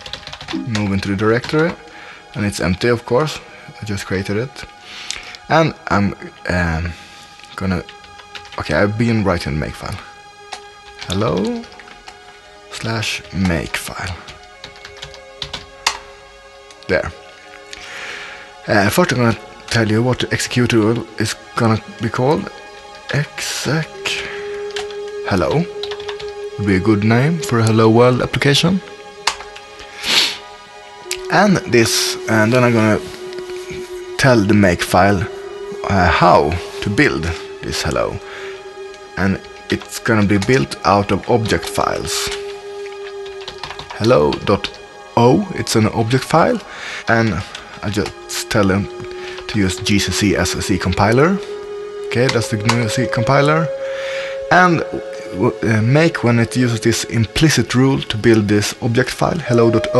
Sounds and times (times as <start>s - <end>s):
Music: 0.0s - 59.9s
Speech: 0.6s - 1.8s, 2.4s - 4.7s, 5.5s - 7.0s, 7.6s - 7.9s, 8.6s - 10.0s, 11.0s - 11.7s, 12.7s - 14.2s, 16.9s - 17.2s, 18.7s - 22.5s, 23.1s - 24.3s, 25.3s - 25.7s, 26.6s - 28.9s, 31.2s - 33.0s, 34.2s - 38.2s, 39.2s - 42.4s, 44.0s - 48.9s, 49.5s - 51.4s, 52.1s - 53.7s, 54.5s - 59.9s.